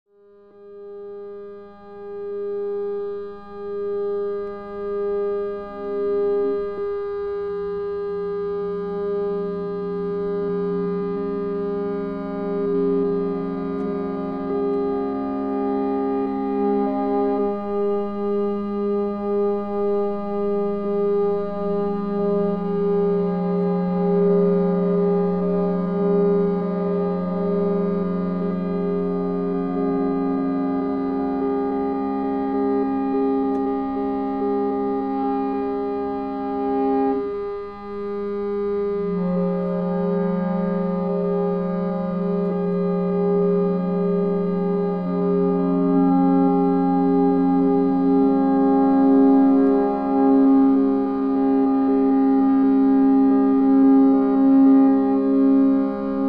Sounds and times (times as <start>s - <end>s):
Electric guitar: 1.0s - 56.2s.